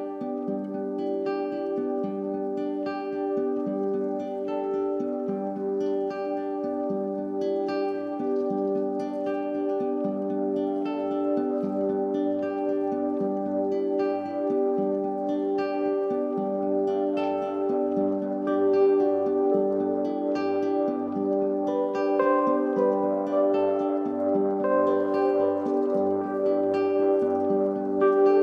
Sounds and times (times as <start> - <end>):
Music: 0.0 - 28.4.